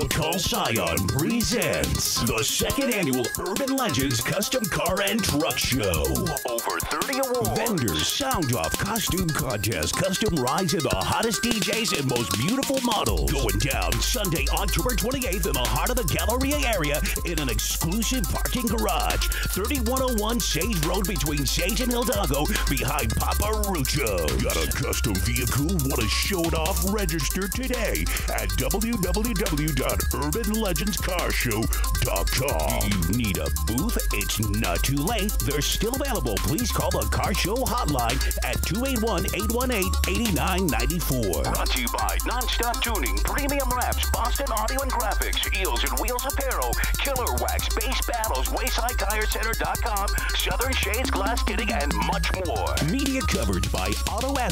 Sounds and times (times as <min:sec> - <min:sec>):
Music: 0:00.0 - 0:54.5
Speech: 0:00.0 - 0:54.5.